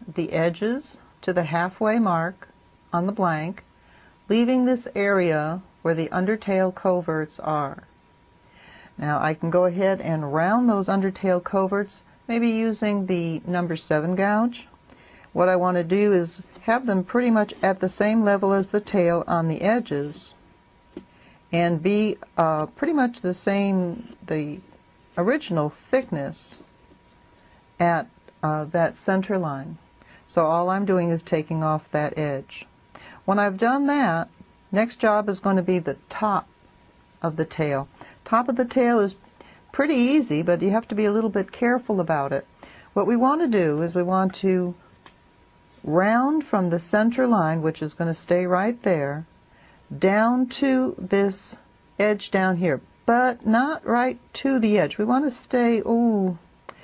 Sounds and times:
Speech: 0.0 - 3.7, 4.3 - 7.9, 9.0 - 14.7, 15.3 - 20.4, 21.5 - 26.7, 27.8 - 36.5, 37.2 - 44.8, 45.8 - 49.3, 49.9 - 56.4.

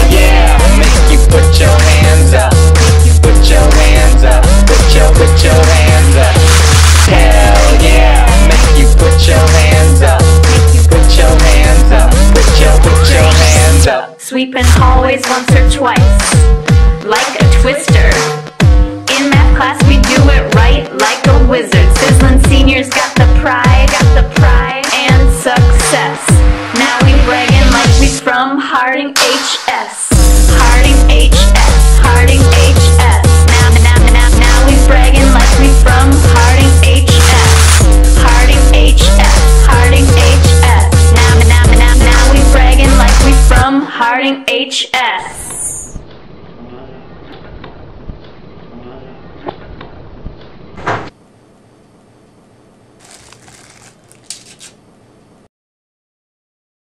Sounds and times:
Music: 0.0 - 44.9.

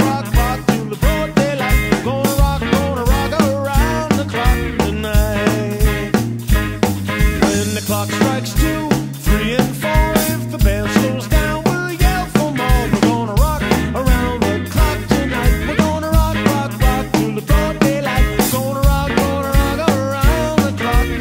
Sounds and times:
Music: 0.0 - 21.2.

